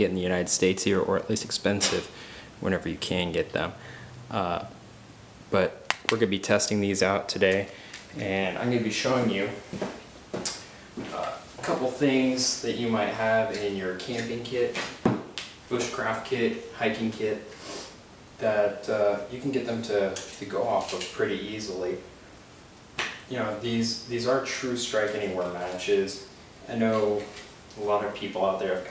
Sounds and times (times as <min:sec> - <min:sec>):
Speech: 0:00.0 - 0:04.8, 0:05.5 - 0:09.6, 0:11.1 - 0:14.8, 0:15.7 - 0:17.5, 0:18.4 - 0:22.1, 0:23.3 - 0:28.9.